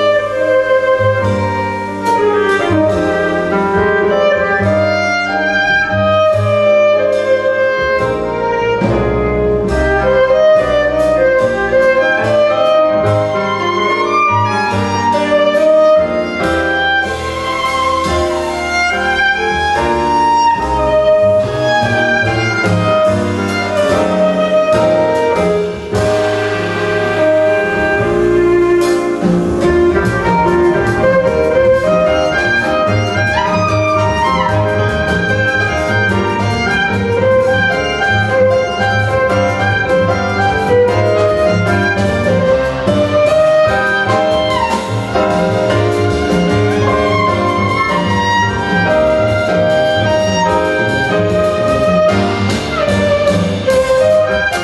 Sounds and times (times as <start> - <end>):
Violin, fiddle: 9.8 - 25.6, 29.7 - 54.6.